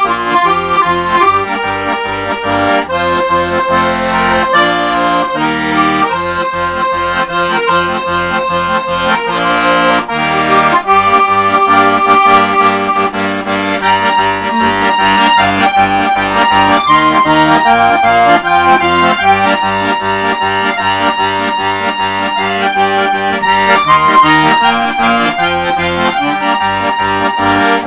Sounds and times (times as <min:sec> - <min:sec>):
Accordion: 0:00.0 - 0:27.8.